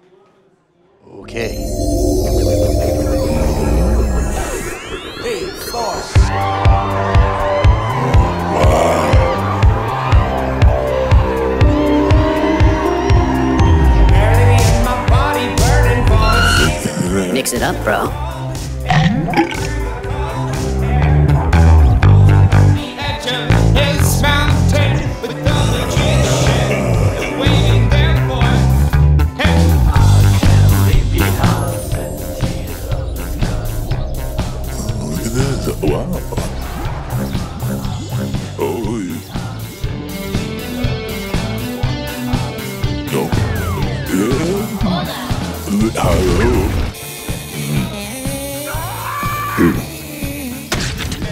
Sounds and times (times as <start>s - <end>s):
Music: 1.2s - 51.3s.